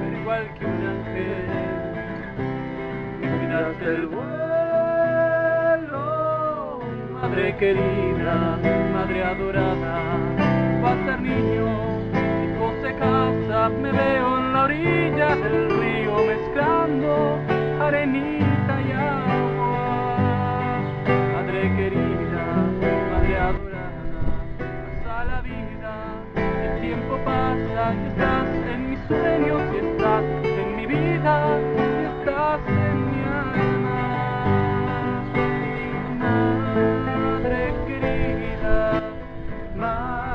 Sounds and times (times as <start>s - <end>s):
Acoustic guitar: 0.0s - 40.3s.